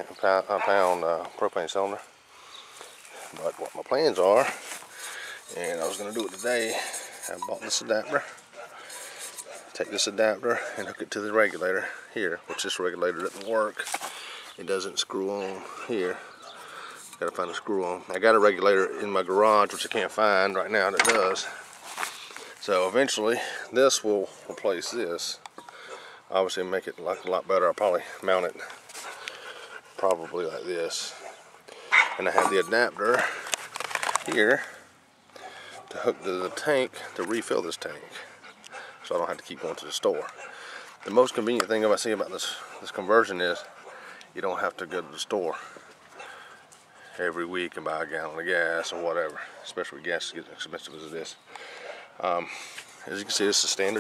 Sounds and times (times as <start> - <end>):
Speech: 0.0 - 2.1, 3.3 - 4.6, 5.5 - 8.4, 9.8 - 13.9, 14.6 - 16.3, 17.2 - 21.6, 22.6 - 25.4, 26.3 - 28.7, 30.0 - 31.2, 32.2 - 33.4, 34.3 - 34.7, 35.9 - 38.3, 39.0 - 40.3, 41.0 - 43.7, 44.4 - 45.7, 47.2 - 51.4, 52.2 - 52.5, 53.1 - 54.0.